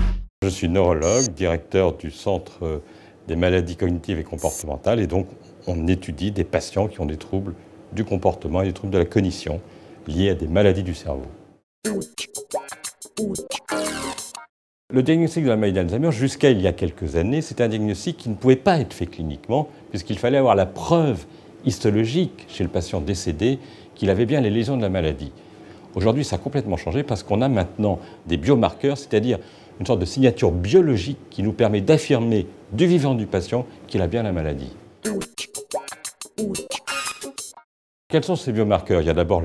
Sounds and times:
Speech: 0.4 - 11.4, 14.9 - 25.4, 26.0 - 34.8, 38.1 - 39.4.

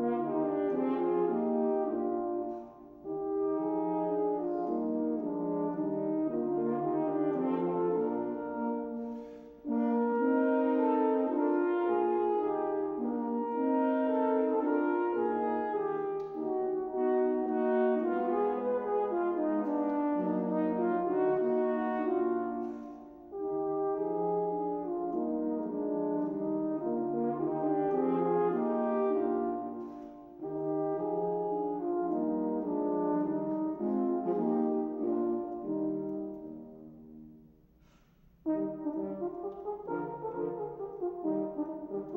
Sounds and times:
Brass instrument: 0.0 - 42.1
Classical music: 0.0 - 42.1
Orchestra: 0.0 - 42.1.

